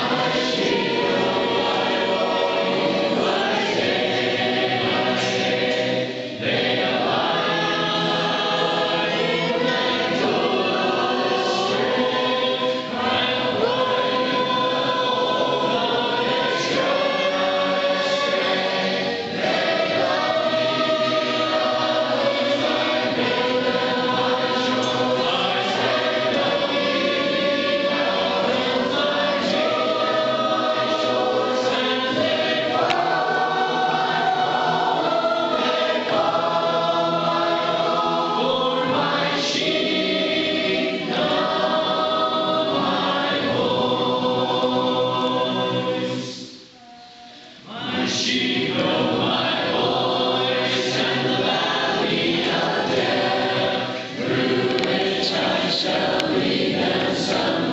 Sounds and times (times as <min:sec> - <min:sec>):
Choir: 0:00.0 - 0:57.7
Gospel music: 0:00.0 - 0:57.7
Vocal music: 0:00.0 - 0:57.7.